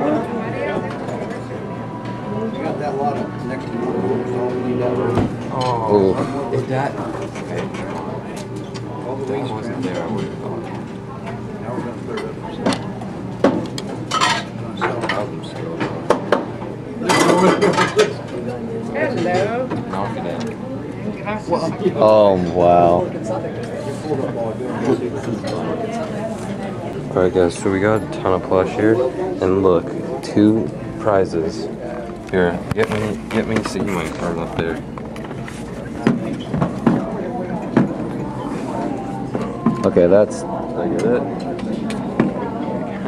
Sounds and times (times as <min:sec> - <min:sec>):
Inside, public space: 0:00.0 - 0:43.0.